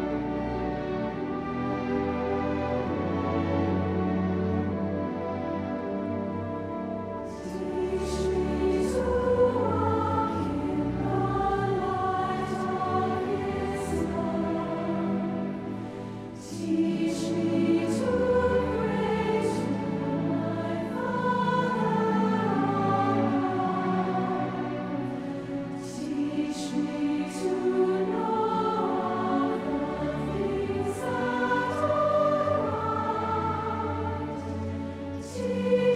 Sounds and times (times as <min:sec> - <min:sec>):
Music: 0:00.0 - 0:35.9.